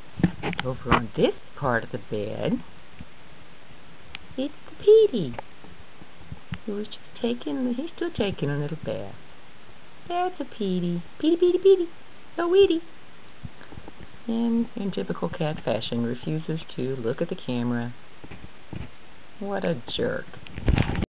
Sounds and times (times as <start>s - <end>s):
Speech: 0.5s - 2.7s, 4.4s - 5.4s, 6.6s - 9.2s, 10.1s - 12.9s, 14.2s - 18.0s, 19.4s - 20.4s.